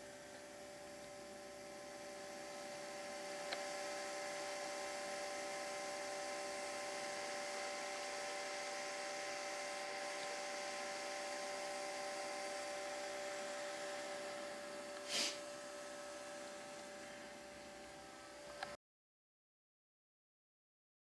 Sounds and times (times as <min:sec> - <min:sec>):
White noise: 0:00.0 - 0:18.8.